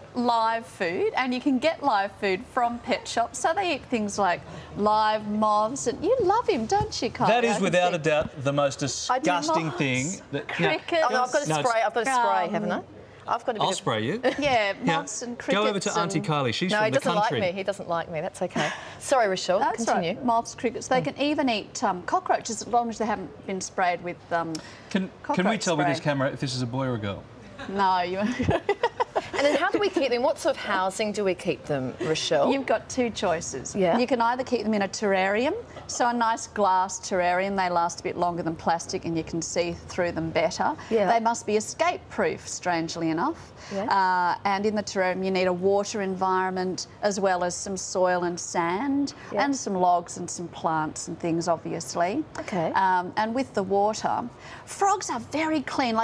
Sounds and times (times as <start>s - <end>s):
Speech: 7.2s - 12.8s, 13.6s - 14.2s, 14.8s - 17.5s, 25.0s - 27.2s.